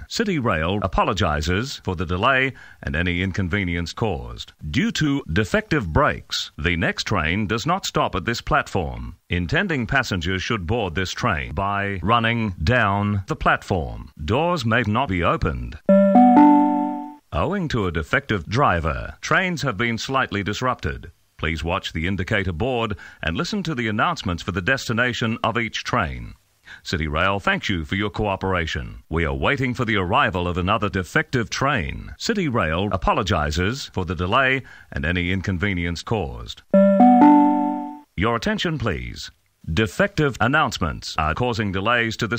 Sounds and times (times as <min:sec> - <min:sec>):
Speech: 0:00.0 - 0:15.9, 0:17.3 - 0:36.7, 0:38.2 - 0:42.3
Music: 0:15.9 - 0:17.2, 0:36.8 - 0:38.0.